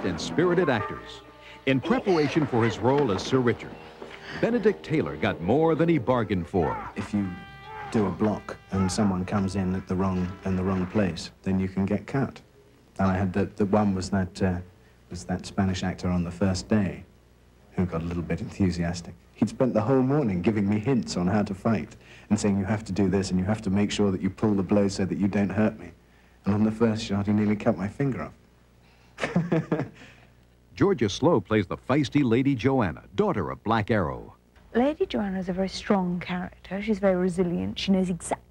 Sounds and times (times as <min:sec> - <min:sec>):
Speech: 0:00.0 - 0:03.8, 0:04.4 - 0:17.1, 0:17.7 - 0:28.4, 0:30.7 - 0:38.5.